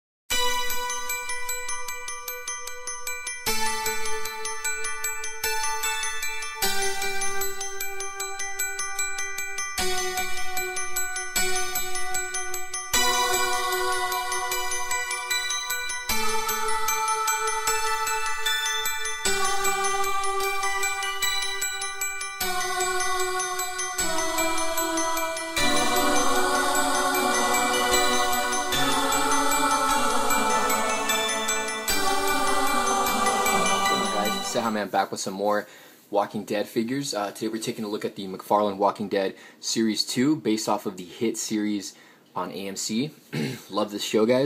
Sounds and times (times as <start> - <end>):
Music: 0.3 - 34.8
Speech: 33.8 - 44.4.